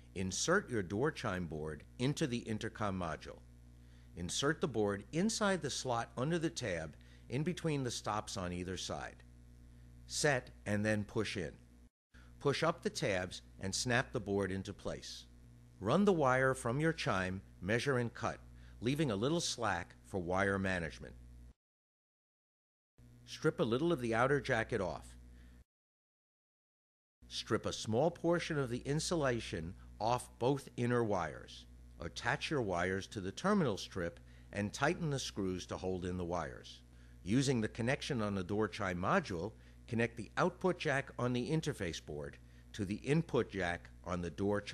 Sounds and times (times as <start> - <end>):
Speech: 0.2 - 3.4, 4.2 - 9.2, 10.1 - 11.6, 12.4 - 21.2, 23.3 - 25.2, 27.3 - 44.7.